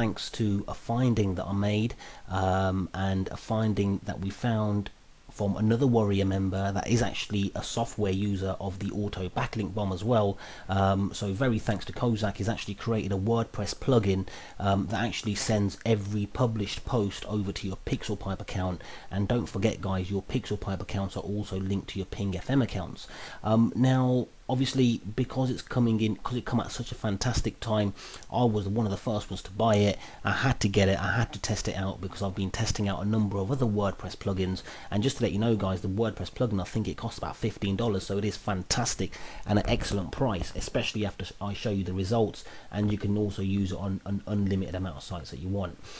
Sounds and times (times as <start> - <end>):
Speech: 0.0 - 45.8.